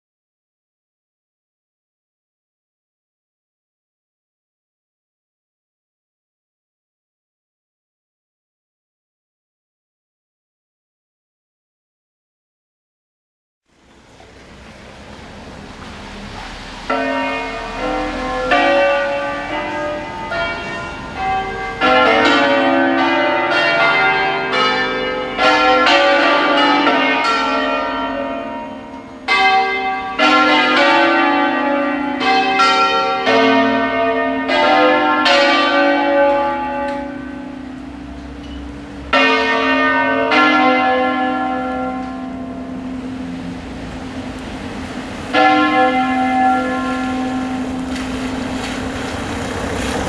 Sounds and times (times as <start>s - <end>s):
Church bell: 16.2s - 50.0s.